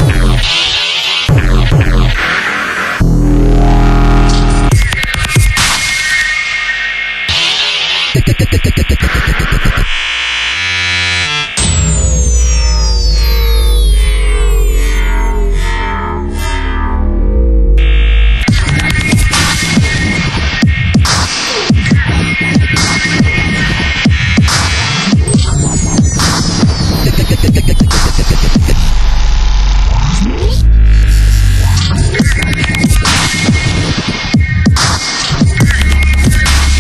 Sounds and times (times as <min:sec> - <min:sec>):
Dubstep: 0:00.0 - 0:36.8.